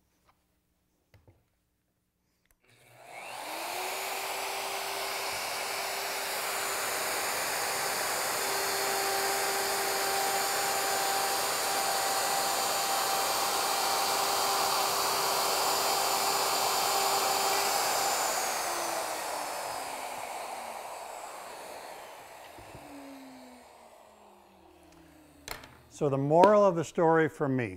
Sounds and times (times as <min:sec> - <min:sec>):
Power tool: 0:02.7 - 0:26.8.